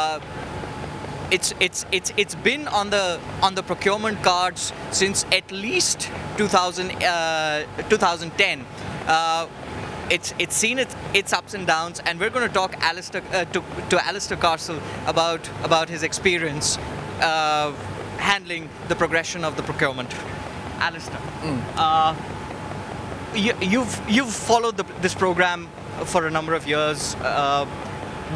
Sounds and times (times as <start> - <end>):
Speech: 0.0 - 0.2, 1.3 - 9.5, 10.1 - 22.2, 23.4 - 27.7.